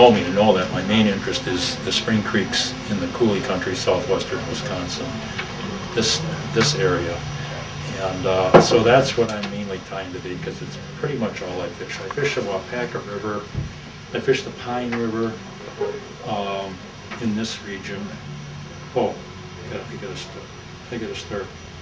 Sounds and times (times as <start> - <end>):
Speech: 0.0 - 18.2, 18.9 - 21.6.